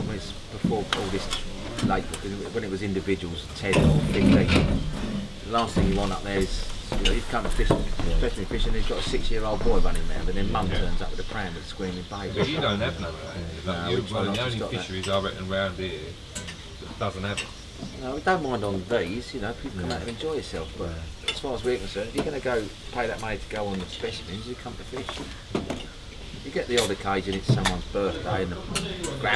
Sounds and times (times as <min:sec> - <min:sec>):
Speech: 0:00.0 - 0:04.8, 0:05.5 - 0:16.2, 0:16.8 - 0:25.3, 0:26.4 - 0:29.3.